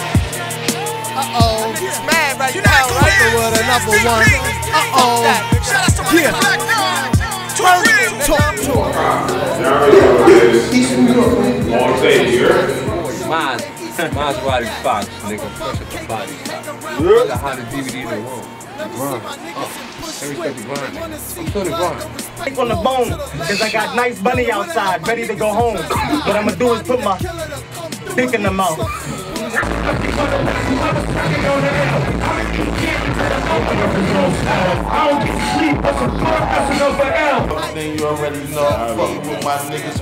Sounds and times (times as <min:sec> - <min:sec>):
Music: 0:00.0 - 0:40.0
Speech: 0:01.3 - 0:27.4, 0:28.0 - 0:32.0, 0:33.7 - 0:40.0.